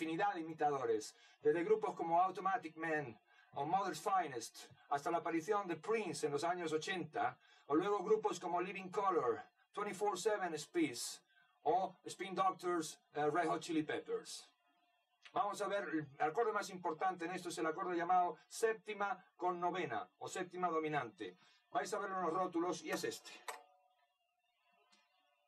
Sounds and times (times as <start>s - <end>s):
Speech: 0.0s - 14.5s, 15.3s - 23.6s.